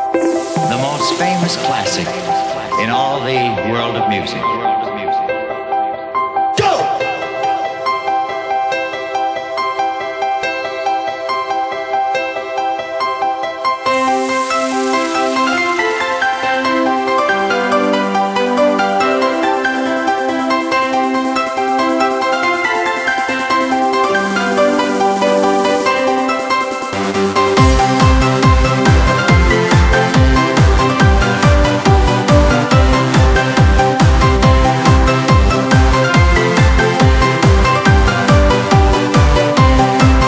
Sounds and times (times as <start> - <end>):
Dance music: 0.0 - 5.3, 6.2 - 40.2
Background music: 0.0 - 40.2
Independent music: 0.0 - 40.2
Theme music: 0.0 - 40.2.